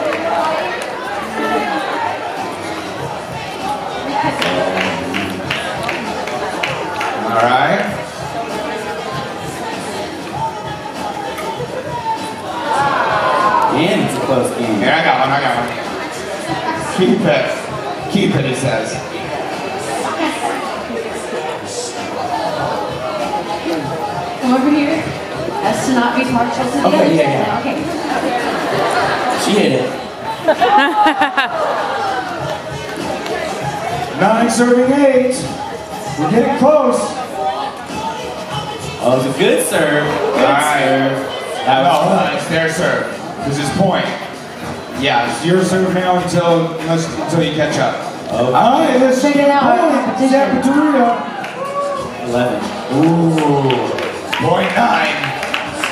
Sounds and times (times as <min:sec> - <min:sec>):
Inside, public space: 0:00.0 - 0:55.9.